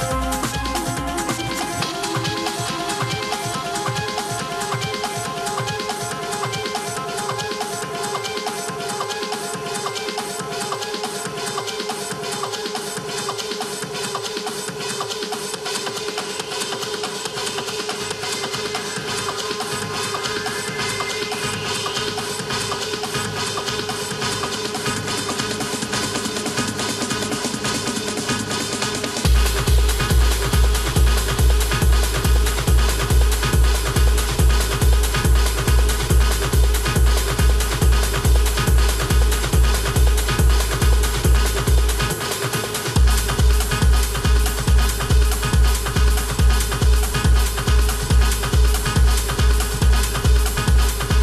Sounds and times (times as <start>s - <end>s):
Trance music: 0.0s - 51.2s.